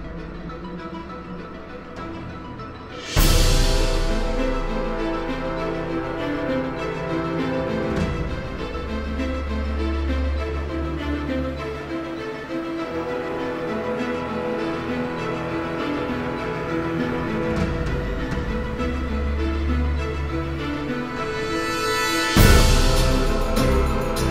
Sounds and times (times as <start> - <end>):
Music: 0.0 - 24.3.